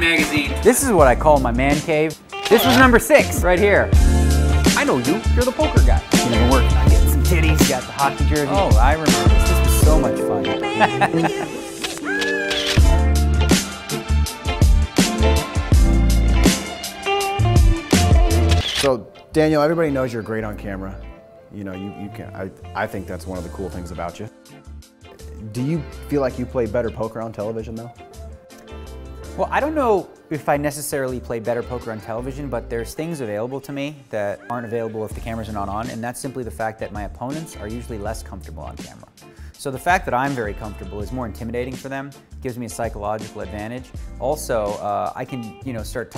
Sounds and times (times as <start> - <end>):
Speech: 0.0 - 3.9, 4.8 - 11.6, 18.8 - 24.3, 25.4 - 27.9, 29.4 - 46.1
Music: 0.0 - 46.1.